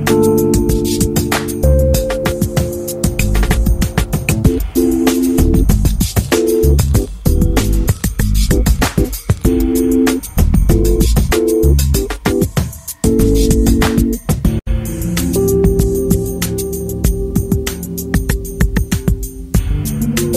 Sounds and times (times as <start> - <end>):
Music: 0.0 - 20.3.